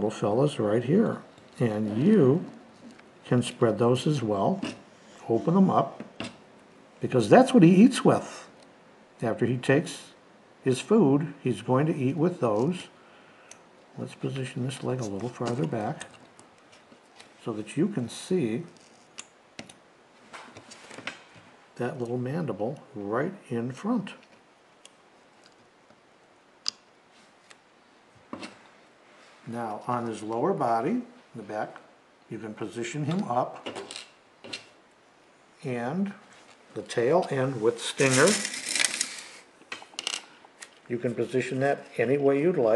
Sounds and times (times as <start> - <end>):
Speech: 0.0 - 2.6, 3.2 - 6.0, 7.0 - 8.5, 9.2 - 13.0, 14.0 - 16.2, 17.4 - 18.8, 21.8 - 24.3, 29.5 - 33.7, 35.6 - 38.5, 40.9 - 42.7
Inside, small room: 0.0 - 42.7.